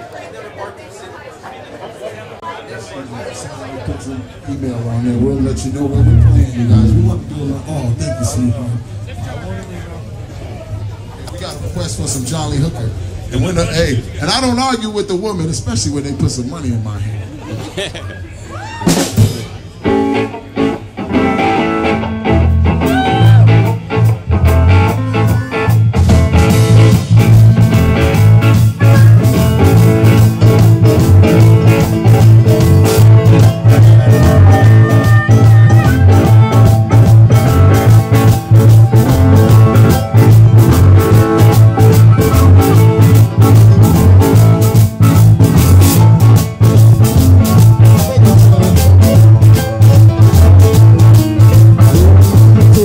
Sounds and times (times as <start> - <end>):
Speech: 0.0 - 17.6
Blues: 18.4 - 52.8.